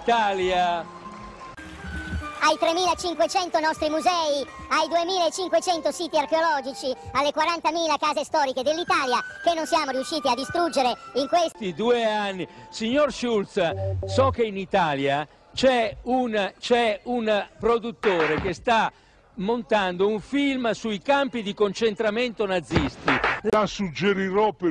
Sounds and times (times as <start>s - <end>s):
Speech: 0.0s - 0.8s, 2.4s - 24.7s.